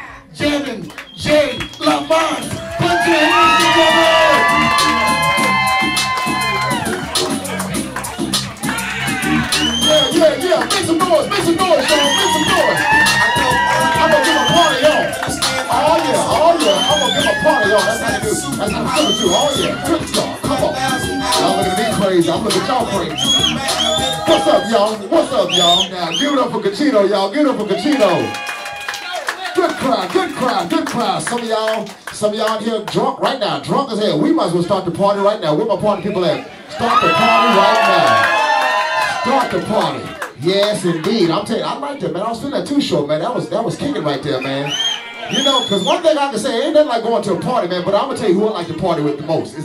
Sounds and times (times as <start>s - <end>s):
Music: 1.8s - 25.8s.